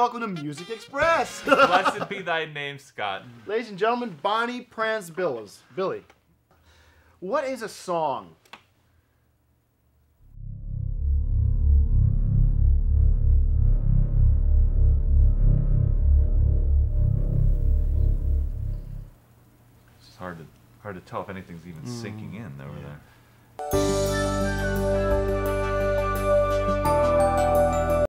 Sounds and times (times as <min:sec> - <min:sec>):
Music: 0:00.0 - 0:01.3, 0:23.6 - 0:28.0
Speech: 0:00.0 - 0:06.1, 0:07.2 - 0:08.4, 0:20.0 - 0:23.1.